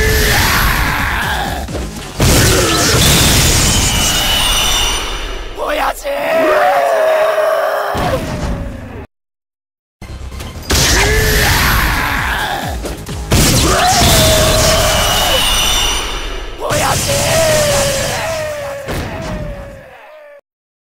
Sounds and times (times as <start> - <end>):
Bellow: 0.0 - 1.6, 6.2 - 8.8, 10.9 - 12.7, 13.6 - 16.0, 16.6 - 20.4
Yell: 0.0 - 1.6, 4.2 - 8.6, 10.8 - 12.8, 13.6 - 20.4
Music: 0.0 - 6.2, 10.0 - 19.8
Speech: 5.6 - 8.7, 16.6 - 20.4
Whoop: 17.2 - 20.4.